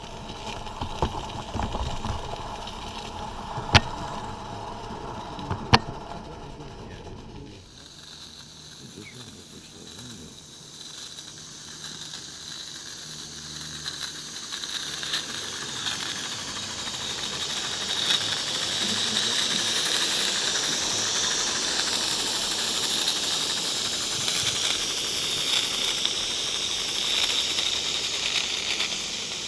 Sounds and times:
Hiss: 0:00.0 - 0:29.4.

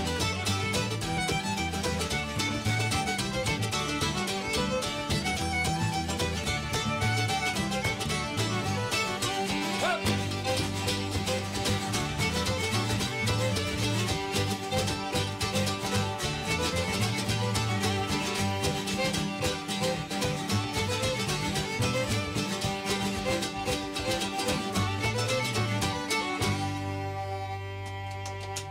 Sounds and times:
Bluegrass: 0:00.0 - 0:28.7
Guitar: 0:00.0 - 0:28.7.

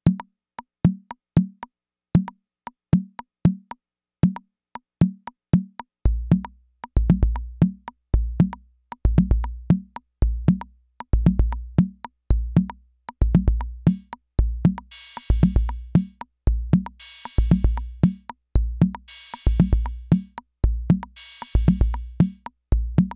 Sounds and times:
Drum machine: 0:05.0 - 0:23.1.

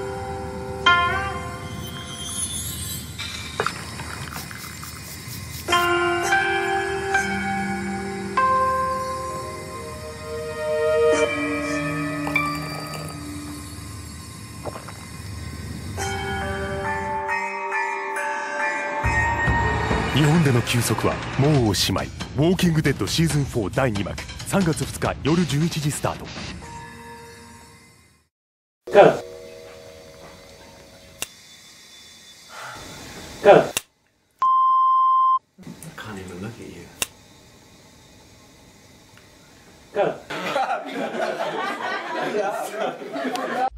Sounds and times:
Speech: 0:20.1 - 0:26.3, 0:35.6 - 0:37.0.

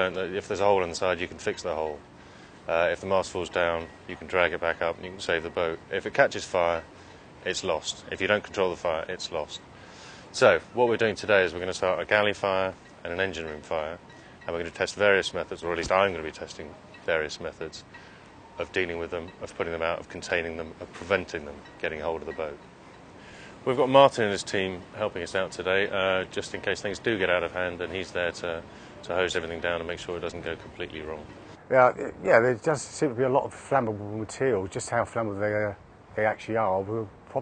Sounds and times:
Speech: 0:00.0 - 0:02.0, 0:02.7 - 0:06.8, 0:07.4 - 0:09.6, 0:10.3 - 0:17.8, 0:18.6 - 0:22.6, 0:23.6 - 0:37.4.

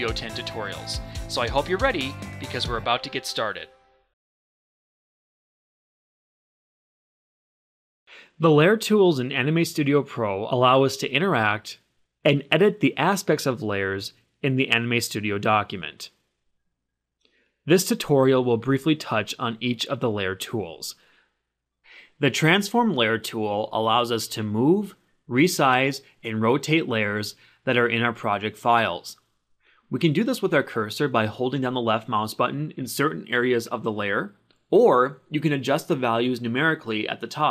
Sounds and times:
Speech: 0:00.0 - 0:03.7, 0:08.4 - 0:16.2, 0:17.7 - 0:21.0, 0:22.1 - 0:29.2, 0:29.9 - 0:37.5.

